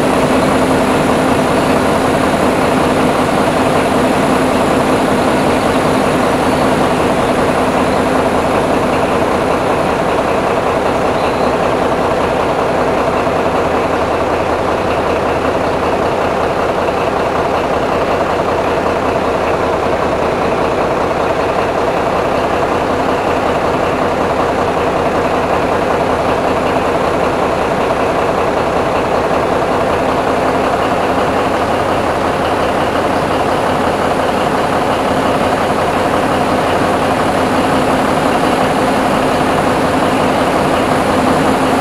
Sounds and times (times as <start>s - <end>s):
Truck: 0.0s - 41.8s.